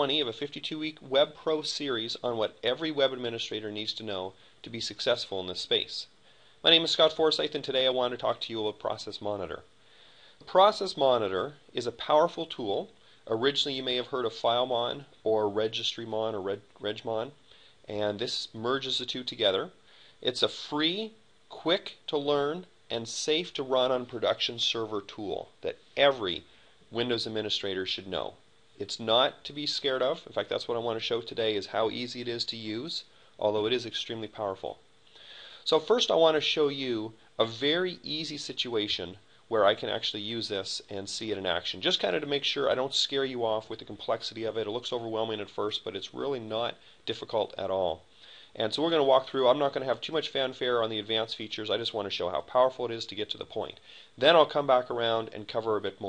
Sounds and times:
Speech: 0:00.0 - 0:09.7, 0:10.4 - 0:34.8, 0:35.6 - 0:56.0.

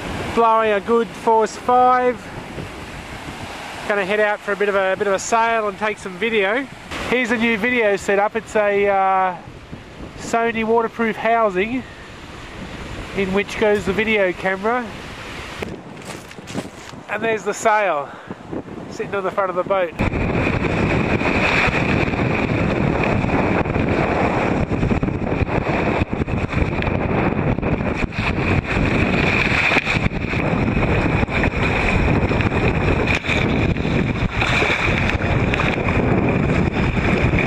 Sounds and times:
Rowboat, canoe, kayak: 0:00.0 - 0:37.4.

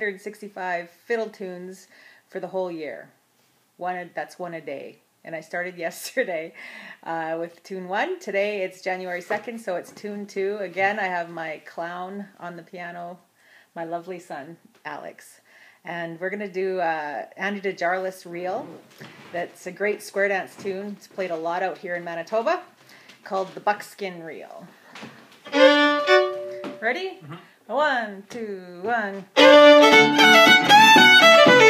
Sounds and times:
Speech: 0:03.8 - 0:13.2, 0:13.8 - 0:18.8, 0:19.4 - 0:22.7, 0:23.3 - 0:24.7, 0:26.8 - 0:29.3
Violin, fiddle: 0:25.5 - 0:26.8, 0:29.4 - 0:31.7.

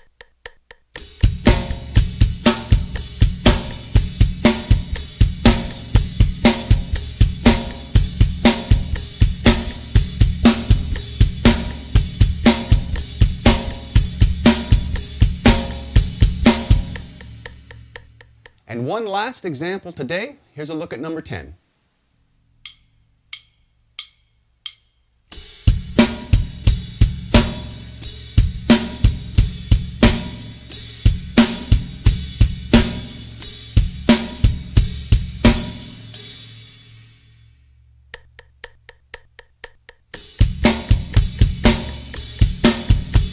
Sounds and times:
Bass drum: 0:01.0 - 0:18.6, 0:25.4 - 0:36.1, 0:38.1 - 0:43.3
Speech: 0:18.7 - 0:21.6.

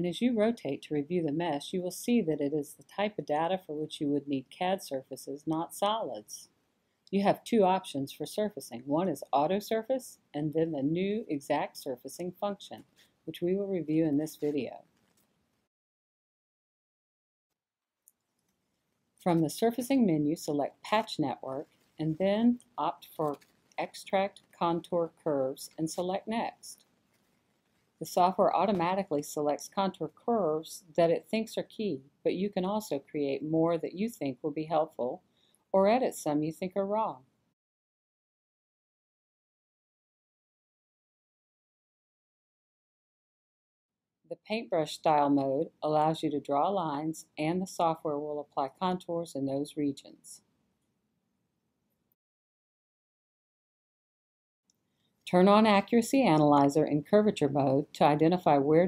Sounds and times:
Speech: 0:00.0 - 0:06.5, 0:07.1 - 0:14.8, 0:19.2 - 0:26.8, 0:28.0 - 0:35.2, 0:35.8 - 0:37.2, 0:44.3 - 0:50.4, 0:55.3 - 0:58.8.

